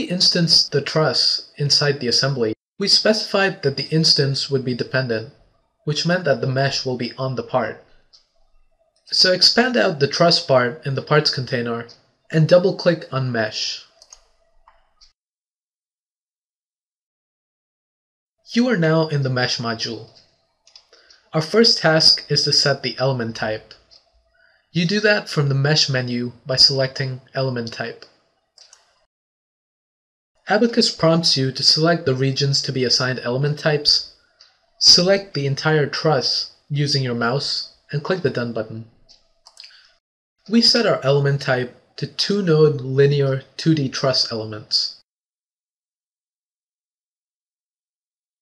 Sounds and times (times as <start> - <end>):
Speech: 0.0 - 7.9, 9.1 - 13.9, 18.5 - 20.2, 21.4 - 23.9, 24.8 - 28.1, 30.5 - 34.1, 34.8 - 39.0, 40.5 - 45.1.